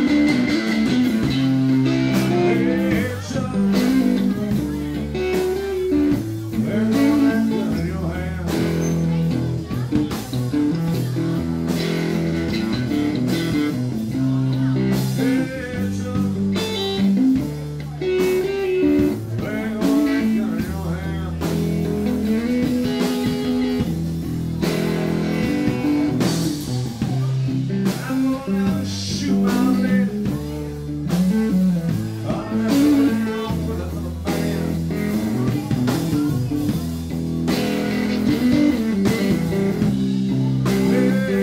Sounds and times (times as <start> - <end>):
Acoustic guitar: 0.0 - 41.4
Speech: 0.0 - 41.4
Strum: 0.0 - 41.4.